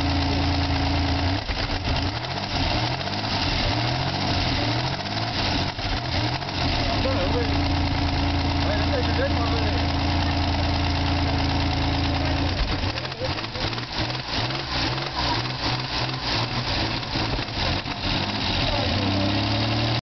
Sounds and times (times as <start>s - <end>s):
Medium engine (mid frequency): 0.0s - 20.0s
Vehicle: 0.0s - 20.0s
Accelerating, revving, vroom: 1.3s - 7.4s, 12.8s - 20.0s
Speech: 6.8s - 7.6s, 8.6s - 10.7s, 12.1s - 13.8s, 18.6s - 19.4s.